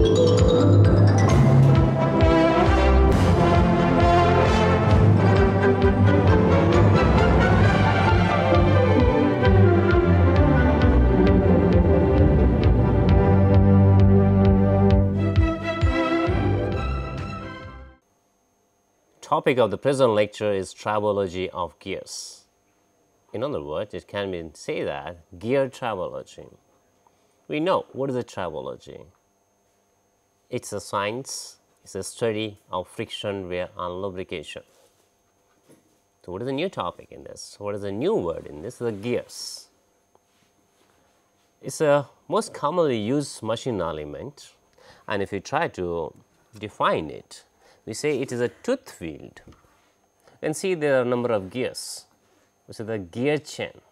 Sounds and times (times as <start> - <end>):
Speech: 19.2 - 22.5, 23.3 - 26.6, 27.5 - 29.2, 30.5 - 34.7, 36.2 - 39.8, 41.6 - 49.5, 50.4 - 53.9.